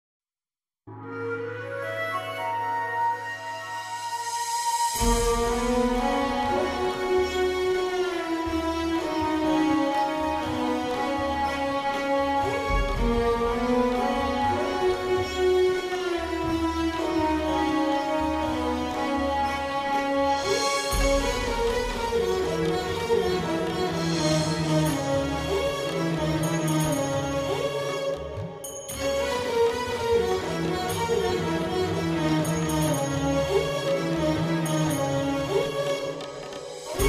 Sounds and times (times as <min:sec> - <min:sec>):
Music: 0:00.8 - 0:37.0.